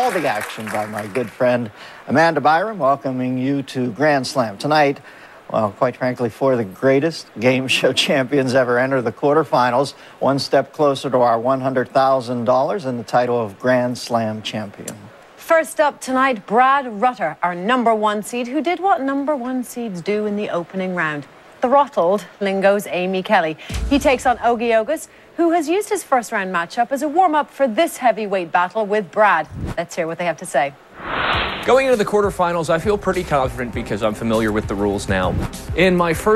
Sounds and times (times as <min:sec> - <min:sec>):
Music: 0:31.7 - 0:36.3
Speech: 0:31.7 - 0:36.3.